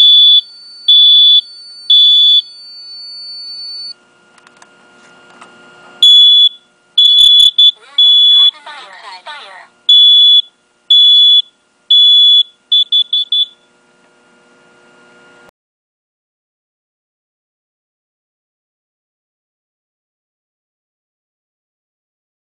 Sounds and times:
Smoke detector, smoke alarm: 0:00.0 - 0:04.0, 0:06.0 - 0:08.6, 0:09.9 - 0:13.7.

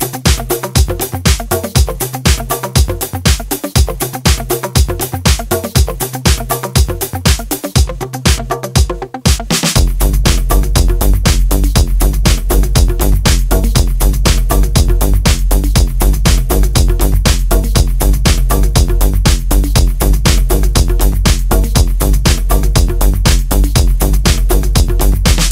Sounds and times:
Electronic music: 0:00.0 - 0:25.5.

